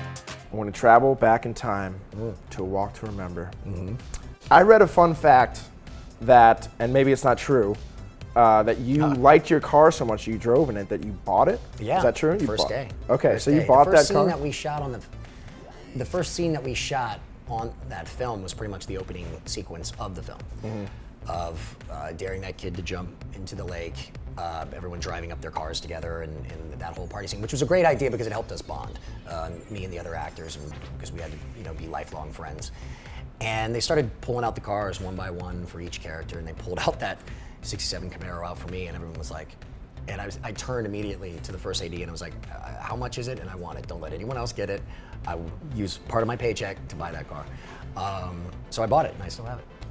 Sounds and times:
Music: 0:00.0 - 0:49.9.

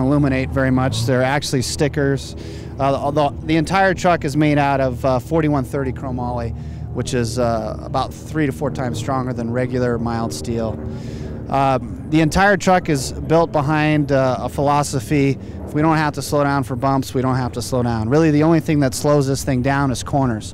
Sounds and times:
Speech: 0:00.0 - 0:10.8, 0:11.5 - 0:20.5.

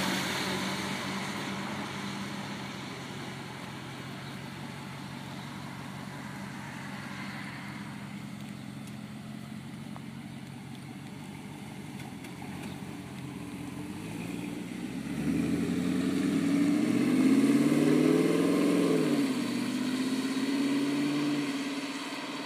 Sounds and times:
Car: 0:00.0 - 0:22.4
Medium engine (mid frequency): 0:00.0 - 0:22.4
Outside, urban or manmade: 0:00.0 - 0:22.4.

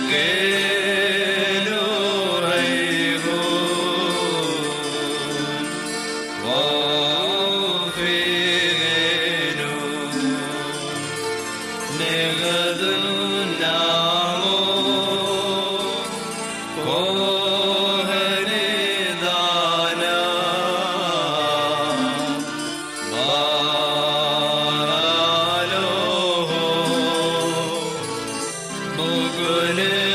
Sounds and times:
Chant: 0:00.0 - 0:30.1.

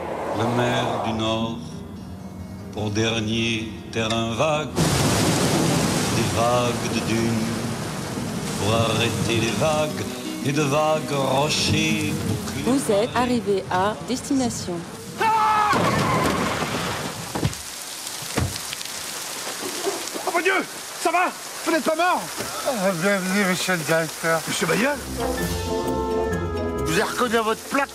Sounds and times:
Rain on surface: 0:04.8 - 0:26.2, 0:26.8 - 0:27.9.

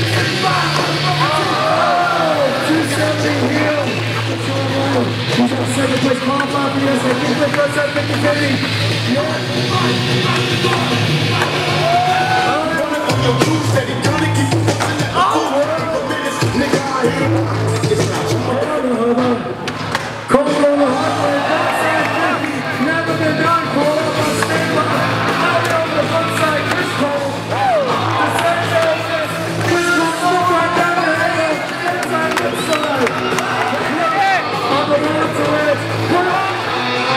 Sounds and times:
Music: 0:00.0 - 0:37.1
Speech: 0:02.2 - 0:11.5, 0:15.2 - 0:19.6, 0:20.3 - 0:33.1, 0:33.7 - 0:37.1.

